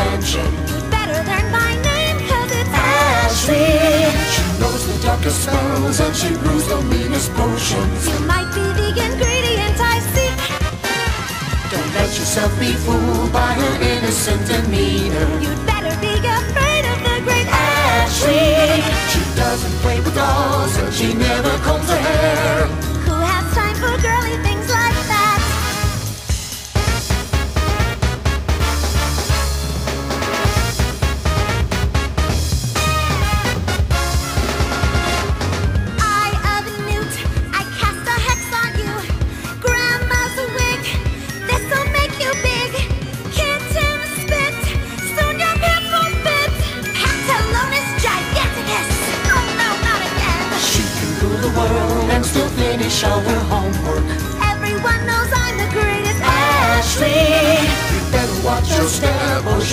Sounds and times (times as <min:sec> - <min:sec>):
Music: 0:00.0 - 0:59.7.